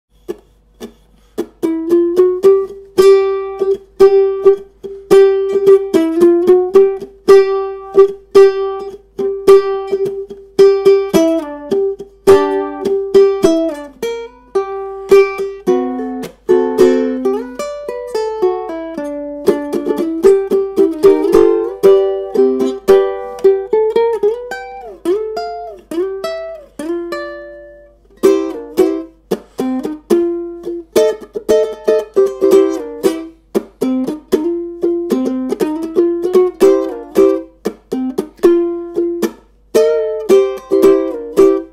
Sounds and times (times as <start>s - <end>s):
Guitar: 0.1s - 41.7s
Ukulele: 0.1s - 41.7s.